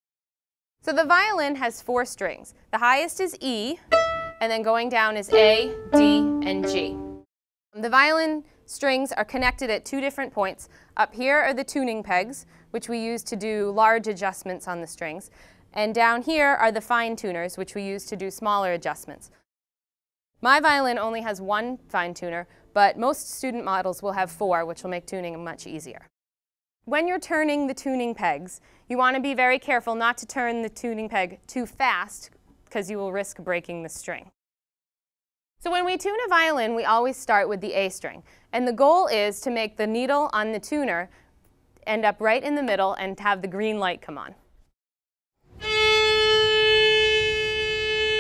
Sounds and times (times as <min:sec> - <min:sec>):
Speech: 0:00.9 - 0:03.8, 0:04.4 - 0:07.0, 0:07.8 - 0:19.3, 0:20.4 - 0:26.1, 0:26.9 - 0:34.4, 0:35.6 - 0:41.1, 0:41.8 - 0:44.4.